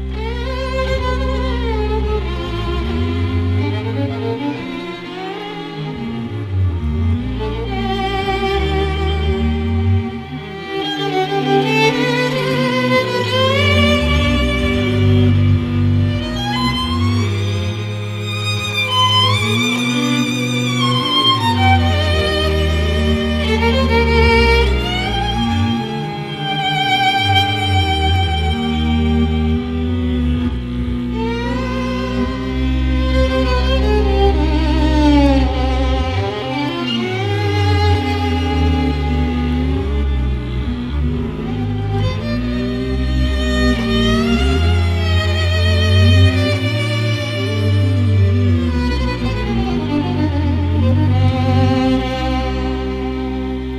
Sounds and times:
Music: 0.0 - 53.7.

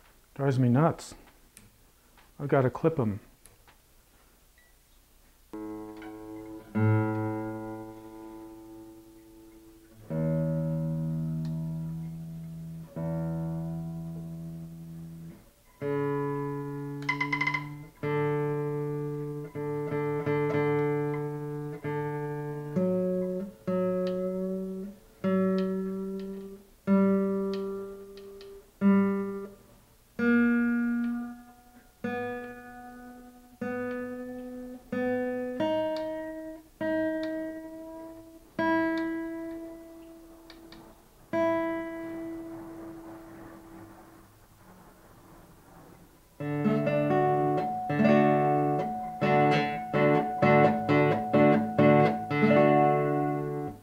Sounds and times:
Acoustic guitar: 5.3 - 53.8.

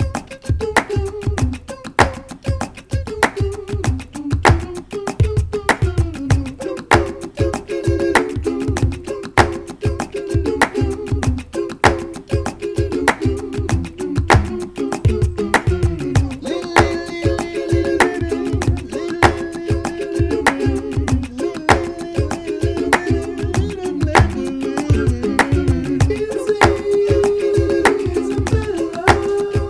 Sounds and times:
Music: 0.0 - 29.6.

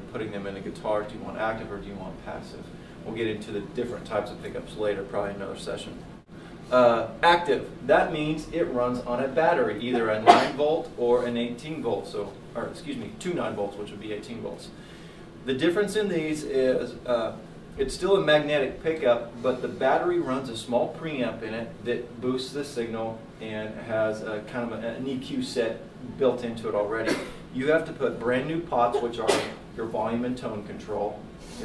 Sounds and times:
Speech: 0.0 - 6.0, 6.7 - 14.8, 15.4 - 31.6.

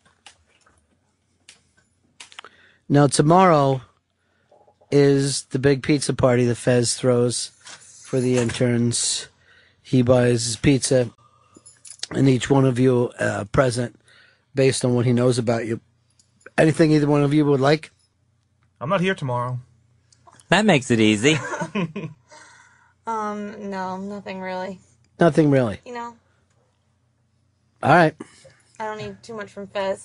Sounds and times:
Speech: 2.9 - 3.9, 4.9 - 7.5, 8.1 - 9.3, 9.9 - 11.1, 12.0 - 14.0, 14.6 - 15.8, 16.6 - 17.9, 18.8 - 19.6, 20.5 - 21.4, 27.8 - 28.2.

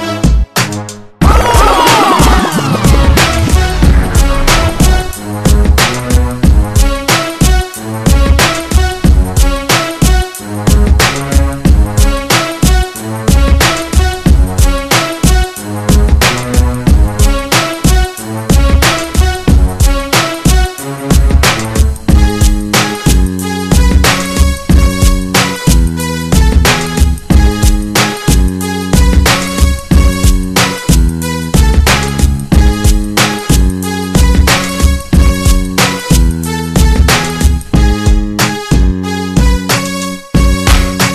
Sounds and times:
Music: 0.0 - 41.1.

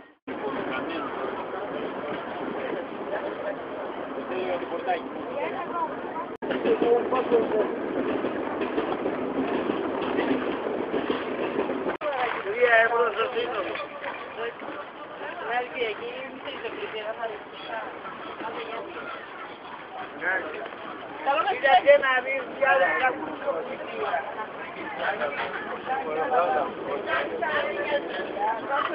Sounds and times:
Speech: 0.0 - 7.8, 12.0 - 28.9.

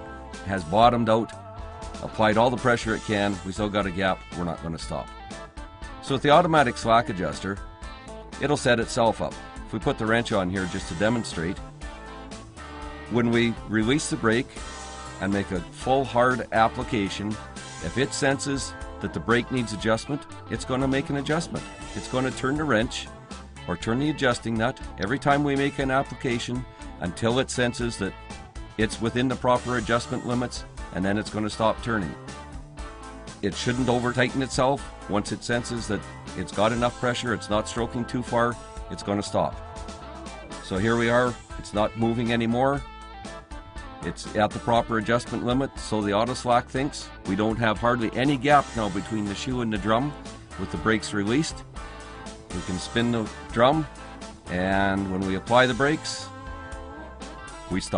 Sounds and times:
Music: 0.0 - 57.9
Speech: 0.5 - 1.4, 2.0 - 5.1, 6.0 - 7.6, 8.4 - 11.6, 13.1 - 14.6, 15.2 - 23.1, 23.7 - 28.2, 28.8 - 32.2, 33.4 - 39.6, 40.6 - 42.8, 44.0 - 51.6, 52.5 - 53.9, 54.5 - 56.3, 57.7 - 57.9.

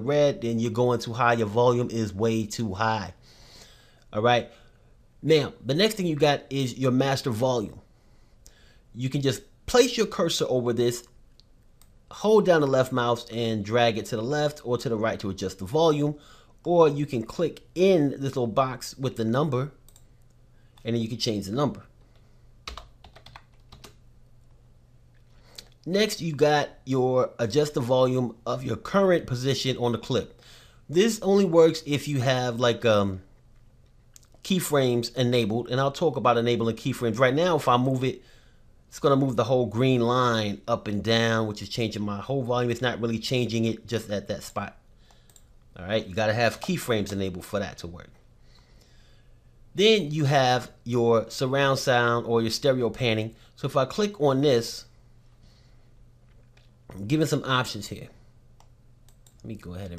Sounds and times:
Computer keyboard: 22.7 - 24.0.

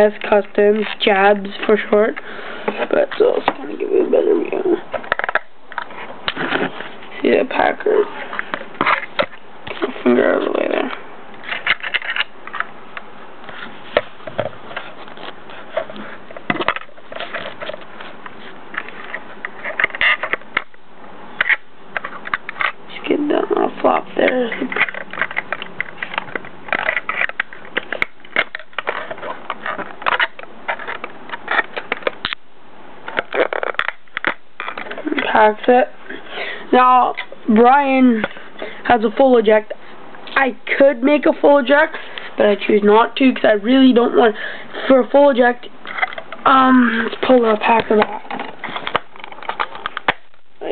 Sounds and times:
Speech: 0.0 - 2.2, 2.8 - 4.8, 7.2 - 8.1, 9.8 - 11.0, 22.9 - 24.8, 35.0 - 36.0, 36.7 - 38.3, 38.9 - 39.8, 40.4 - 45.7, 46.5 - 48.2.

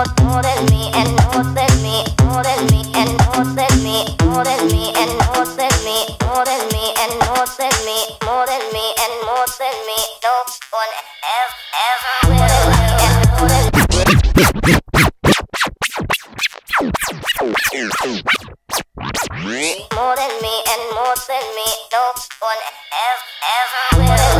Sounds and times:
Electronic music: 0.0 - 6.0, 12.2 - 14.5, 23.9 - 24.3.

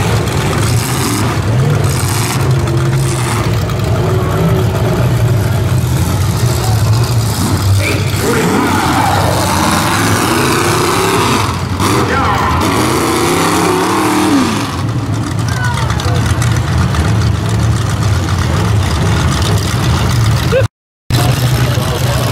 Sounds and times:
Truck: 0.0 - 22.3.

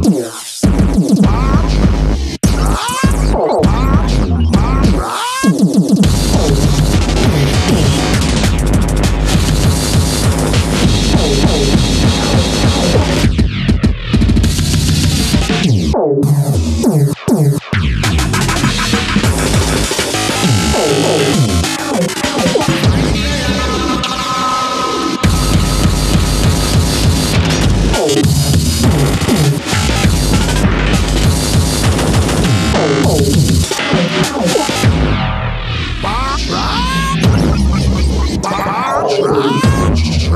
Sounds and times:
Electronic music: 0.0 - 40.3.

